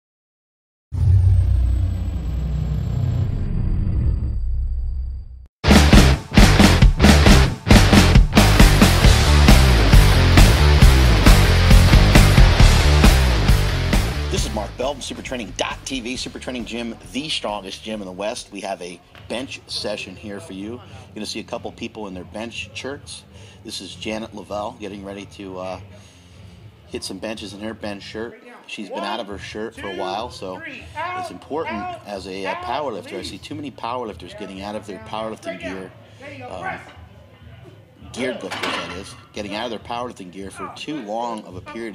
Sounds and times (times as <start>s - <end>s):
Speech: 14.3s - 25.9s, 26.9s - 41.9s.